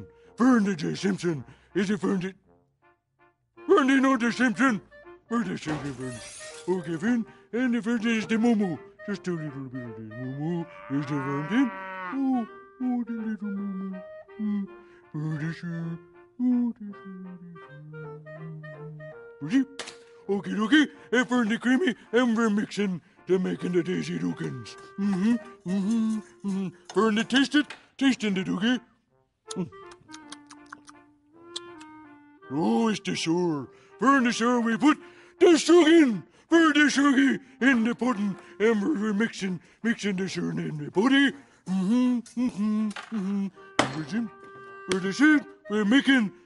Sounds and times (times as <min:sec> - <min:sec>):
Music: 0:00.0 - 0:46.4
Speech: 0:00.4 - 0:02.4, 0:03.7 - 0:13.5, 0:19.4 - 0:28.8, 0:32.5 - 0:44.3, 0:44.9 - 0:46.3.